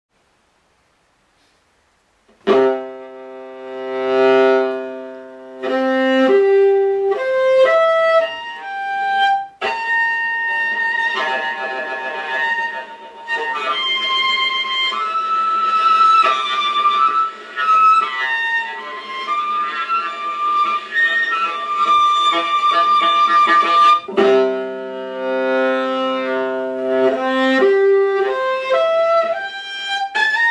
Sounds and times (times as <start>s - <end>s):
Violin, fiddle: 2.4s - 30.5s.